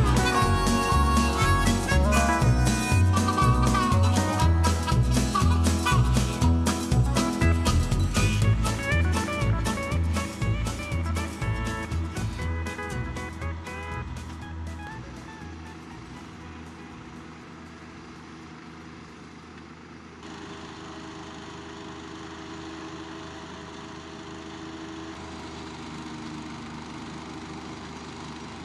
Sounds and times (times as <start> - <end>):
Music: 0.0 - 17.5.